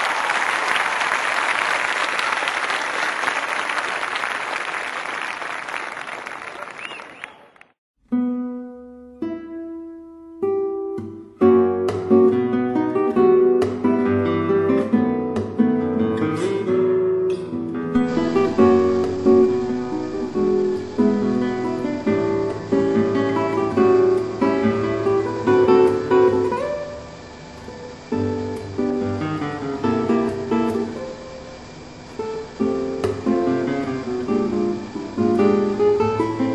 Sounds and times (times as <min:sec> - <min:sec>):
Acoustic guitar: 0:08.0 - 0:36.5
Strum: 0:11.0 - 0:36.5.